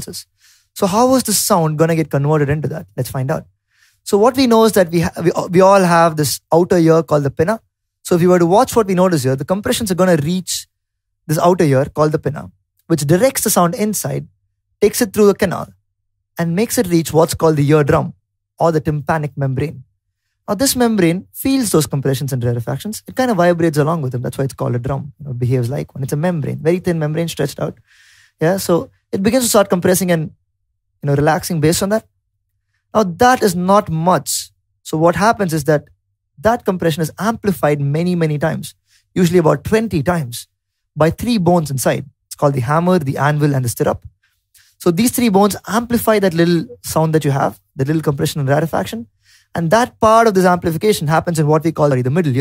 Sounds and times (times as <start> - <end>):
Speech: 0.0 - 3.5, 4.1 - 10.7, 11.3 - 15.8, 16.4 - 19.8, 20.5 - 27.8, 28.4 - 30.4, 31.0 - 32.1, 33.0 - 44.1, 44.8 - 52.4.